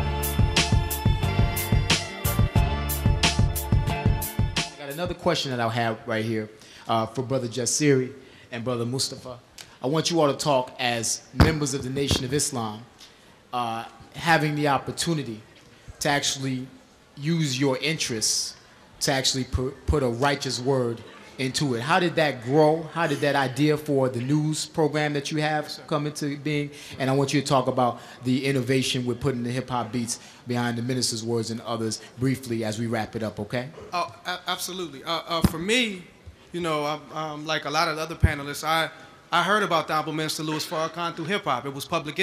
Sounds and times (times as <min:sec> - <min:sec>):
Speech: 0:04.8 - 0:12.9, 0:13.6 - 0:42.2.